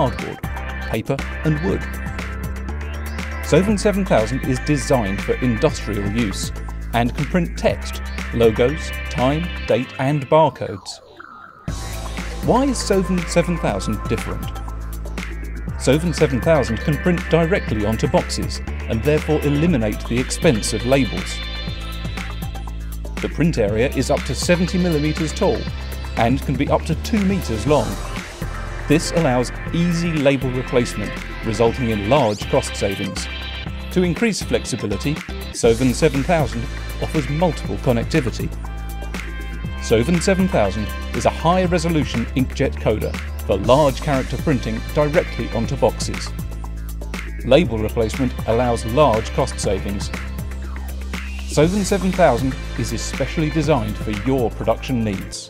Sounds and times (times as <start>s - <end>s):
Speech: 0.0s - 2.0s, 3.5s - 11.0s, 12.4s - 14.6s, 15.8s - 21.4s, 23.2s - 28.1s, 28.9s - 33.3s, 33.9s - 38.5s, 39.8s - 46.4s, 47.5s - 50.2s, 51.5s - 55.4s
Music: 0.0s - 55.4s.